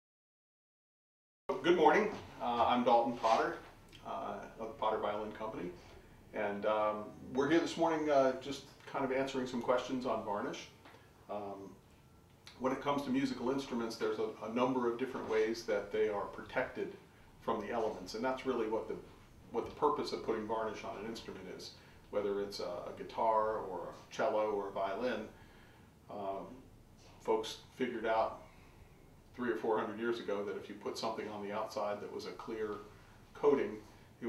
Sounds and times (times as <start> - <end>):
Speech: 1.5 - 11.8, 12.5 - 25.4, 26.1 - 28.4, 29.3 - 34.2.